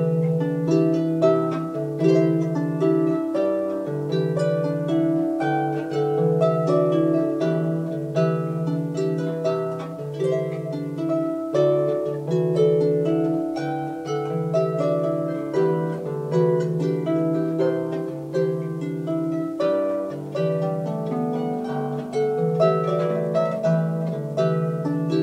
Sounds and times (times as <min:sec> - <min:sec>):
Harp: 0:00.0 - 0:25.2
Plucked string instrument: 0:00.0 - 0:25.2.